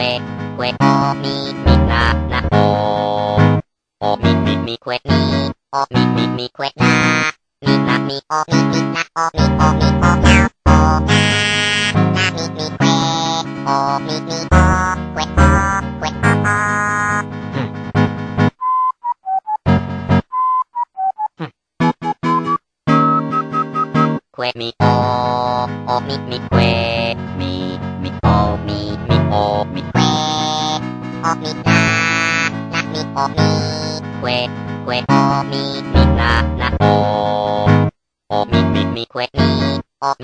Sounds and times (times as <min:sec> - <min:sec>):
Music: 0:00.0 - 0:18.6, 0:19.4 - 0:20.3, 0:21.8 - 0:39.8.